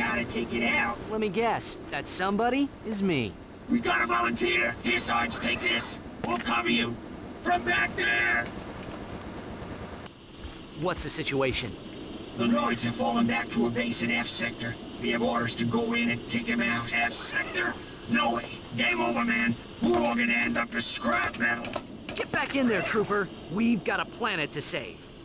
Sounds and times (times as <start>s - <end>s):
Speech: 10.8s - 11.8s, 12.4s - 25.0s.